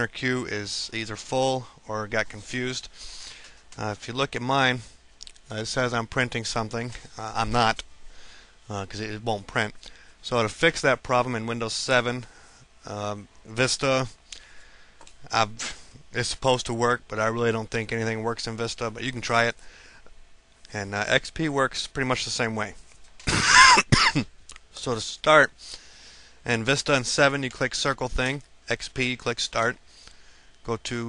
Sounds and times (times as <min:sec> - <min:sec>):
Speech: 0:00.0 - 0:02.9, 0:03.8 - 0:04.9, 0:05.5 - 0:07.8, 0:08.7 - 0:14.2, 0:15.3 - 0:19.6, 0:20.7 - 0:22.8, 0:24.7 - 0:25.6, 0:26.4 - 0:29.8, 0:30.6 - 0:31.0.